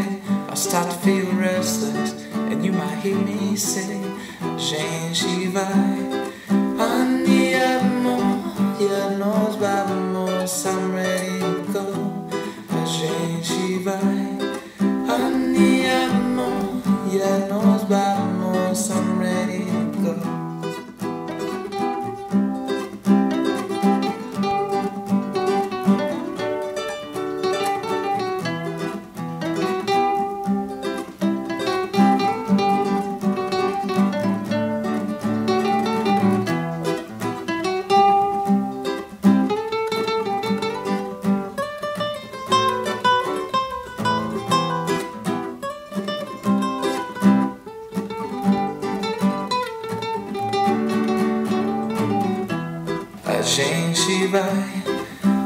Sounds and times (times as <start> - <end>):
Singing: 0.0 - 20.3, 53.2 - 55.2
Acoustic guitar: 0.0 - 55.4
Ukulele: 0.0 - 55.4.